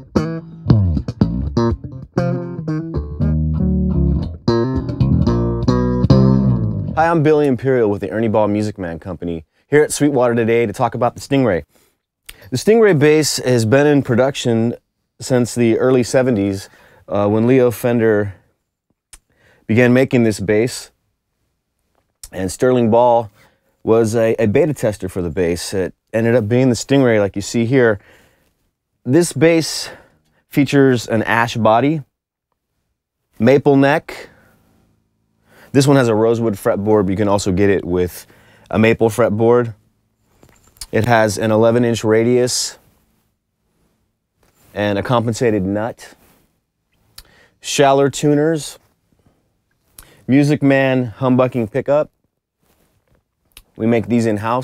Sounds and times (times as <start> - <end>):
Speech: 7.0 - 11.7, 12.5 - 18.4, 19.7 - 21.0, 22.2 - 28.0, 29.0 - 32.1, 33.4 - 34.3, 35.7 - 39.8, 40.8 - 42.8, 44.7 - 46.2, 47.6 - 48.9, 50.3 - 52.1, 53.6 - 54.6.